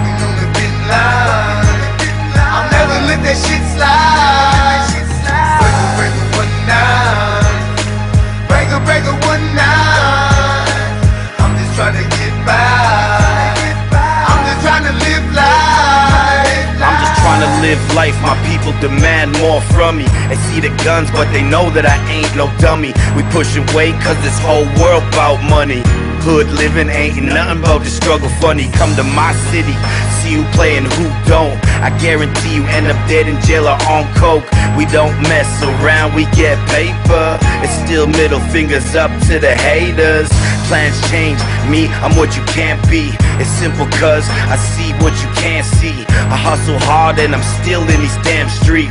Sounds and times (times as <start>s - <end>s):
Music: 0.0s - 48.9s.